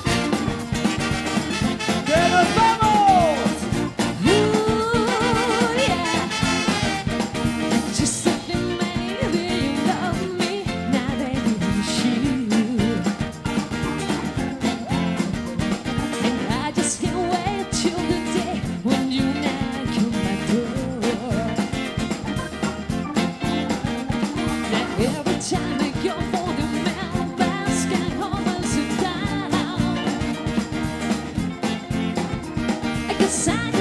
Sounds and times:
Ska: 0:00.0 - 0:33.8
Singing: 0:04.2 - 0:06.5, 0:16.2 - 0:21.9, 0:23.8 - 0:30.2.

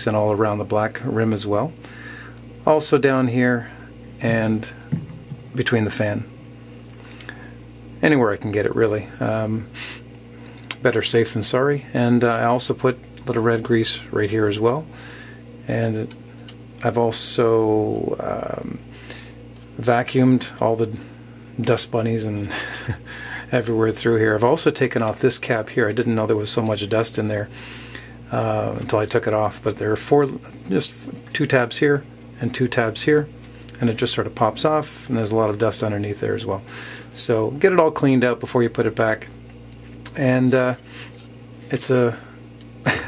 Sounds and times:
Speech: 0:00.0 - 0:01.8, 0:02.6 - 0:04.8, 0:05.5 - 0:06.3, 0:08.0 - 0:09.7, 0:10.7 - 0:14.9, 0:15.6 - 0:16.2, 0:16.8 - 0:18.8, 0:19.8 - 0:22.5, 0:23.5 - 0:27.5, 0:28.3 - 0:39.4, 0:40.1 - 0:40.8, 0:41.7 - 0:42.3.

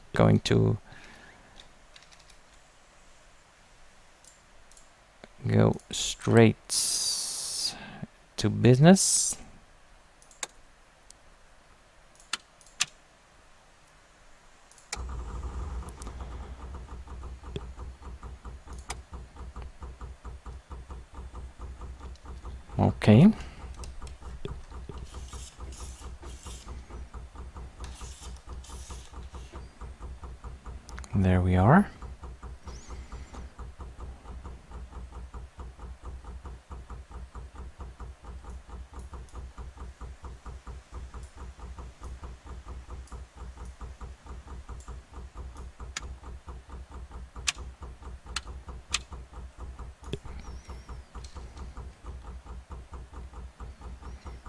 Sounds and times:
Speech: 0:00.2 - 0:00.8, 0:05.4 - 0:07.8, 0:08.4 - 0:09.4, 0:22.8 - 0:23.5, 0:31.1 - 0:32.0.

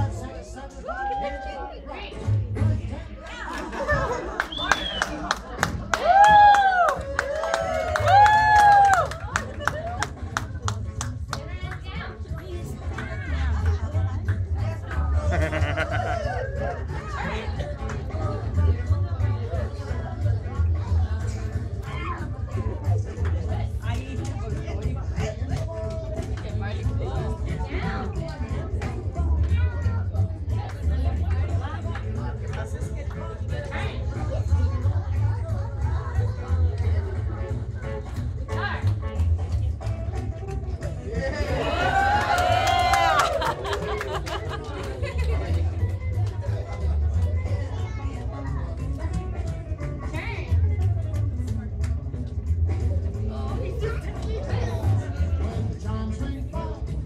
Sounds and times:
Speech: 0:00.0 - 0:04.1, 0:10.5 - 0:39.9, 0:43.1 - 0:57.0
Music: 0:00.0 - 0:57.0.

